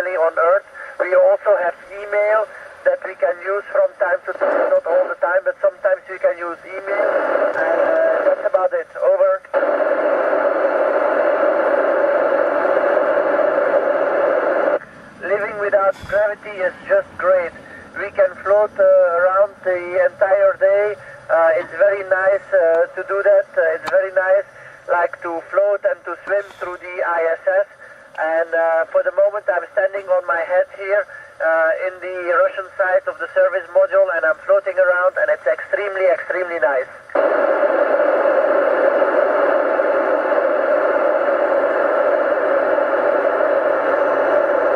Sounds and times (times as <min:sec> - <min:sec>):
Speech: 0:00.0 - 0:09.5, 0:15.2 - 0:36.9
Radio: 0:00.0 - 0:44.7.